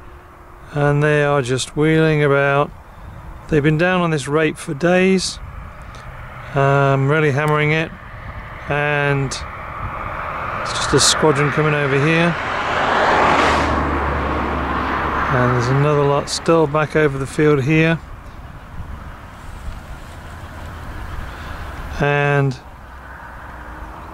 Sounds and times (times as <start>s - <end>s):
Speech: 0.7s - 2.7s, 3.5s - 5.4s, 6.6s - 8.0s, 8.7s - 9.5s, 10.7s - 12.4s, 15.3s - 18.0s, 22.0s - 22.6s.